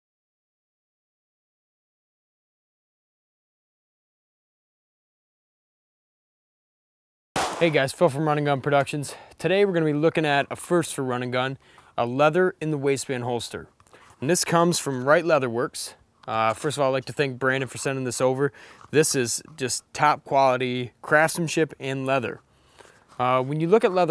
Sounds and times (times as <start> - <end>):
Outside, rural or natural: 7.4 - 24.1
Speech: 7.6 - 22.4, 23.2 - 24.1.